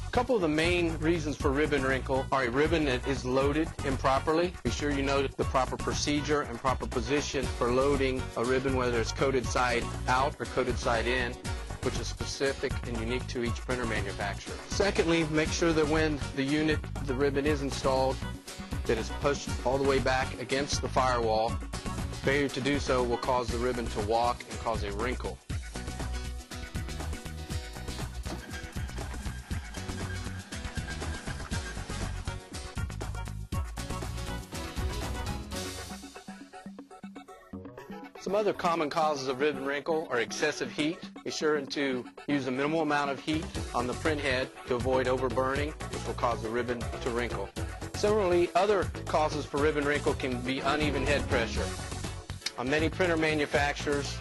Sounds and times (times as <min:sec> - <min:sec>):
Music: 0:00.0 - 0:54.2
Speech: 0:00.1 - 0:18.2, 0:18.9 - 0:21.6, 0:22.2 - 0:25.4, 0:38.2 - 0:51.8, 0:52.5 - 0:54.2.